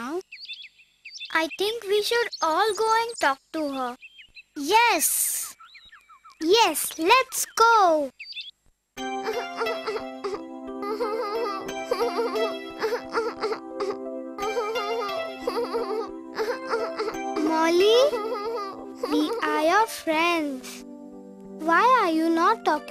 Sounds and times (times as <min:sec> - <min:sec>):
Child speech, kid speaking: 0:00.0 - 0:00.2, 0:01.3 - 0:04.0, 0:04.6 - 0:05.6, 0:06.4 - 0:08.1, 0:17.4 - 0:18.4, 0:19.0 - 0:20.8, 0:21.6 - 0:22.9
Music: 0:09.0 - 0:22.9.